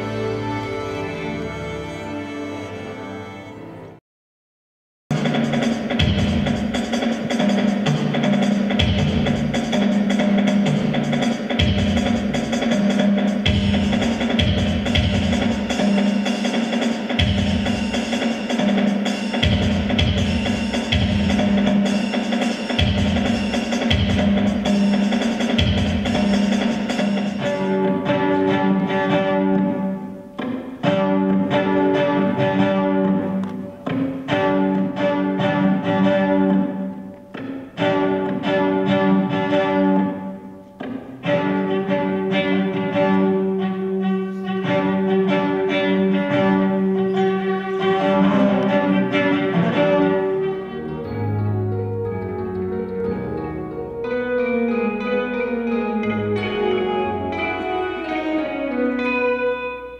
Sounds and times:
Music: 0:00.0 - 0:04.0, 0:05.1 - 0:59.9.

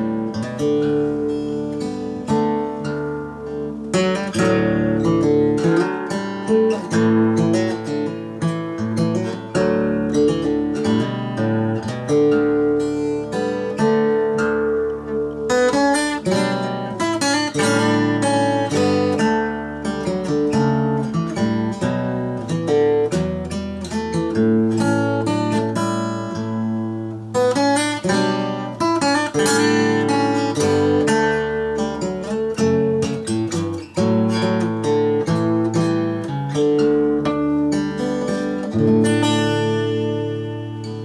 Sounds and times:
Music: 0:00.0 - 0:41.0.

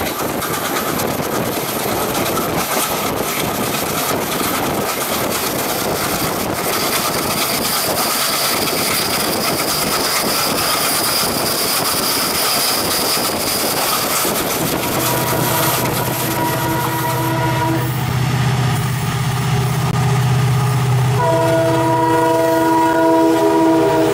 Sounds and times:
Railroad car, train wagon: 0:00.0 - 0:24.1
Train horn: 0:14.8 - 0:18.0, 0:21.1 - 0:24.1.

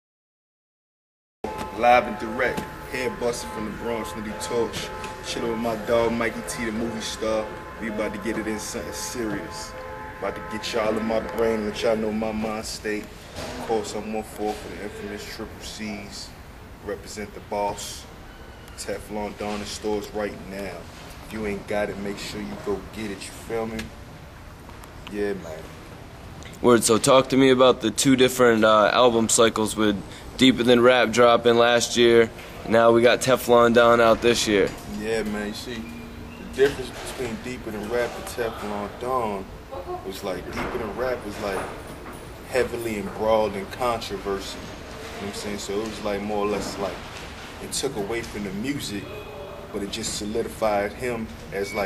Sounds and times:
Speech: 0:01.7 - 0:18.1, 0:26.6 - 0:41.8, 0:42.5 - 0:47.0, 0:47.6 - 0:51.8.

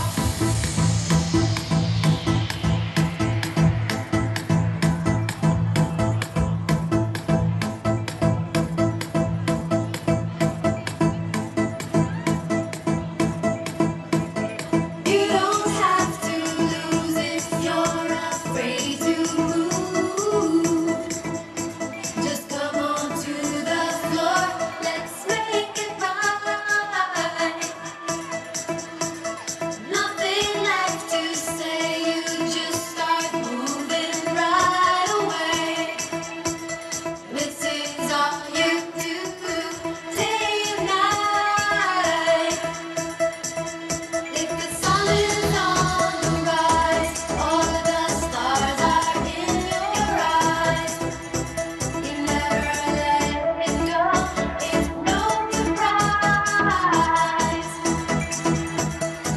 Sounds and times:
Music: 0:00.0 - 0:59.3.

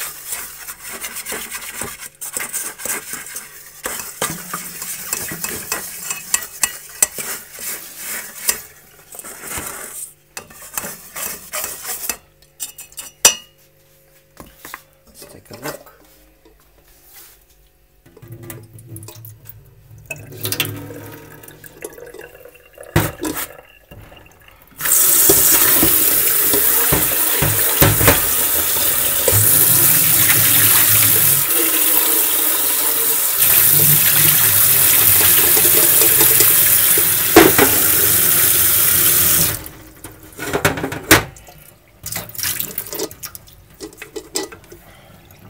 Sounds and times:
Inside, small room: 0:00.0 - 0:45.5
Fill (with liquid): 0:20.1 - 0:39.7.

